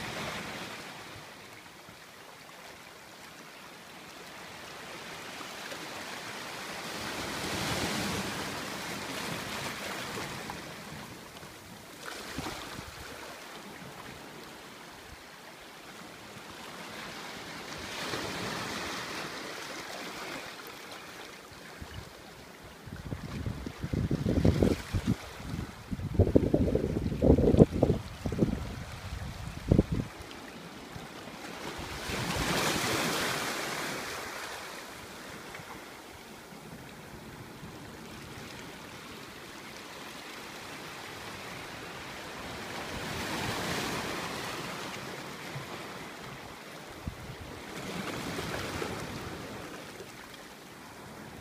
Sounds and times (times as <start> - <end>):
Ocean: 0.0 - 51.4
Outside, rural or natural: 0.0 - 51.4.